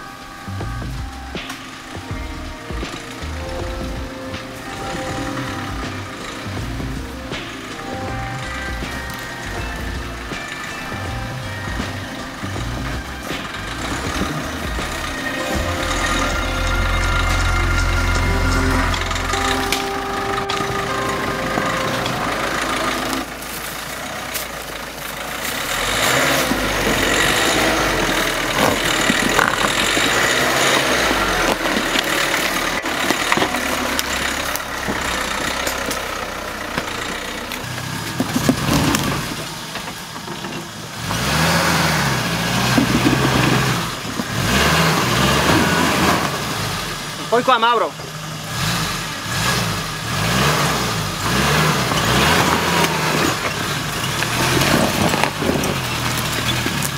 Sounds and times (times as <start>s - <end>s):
Vehicle: 0.0s - 56.9s
Speech: 47.3s - 48.1s.